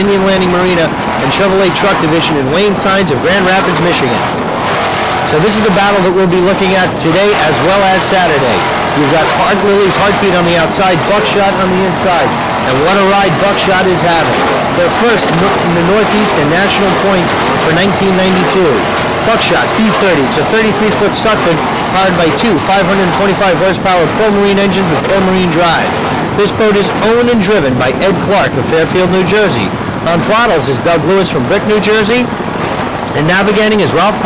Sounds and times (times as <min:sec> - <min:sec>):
Speech: 0:00.0 - 0:04.3, 0:05.3 - 0:32.3, 0:33.1 - 0:34.2.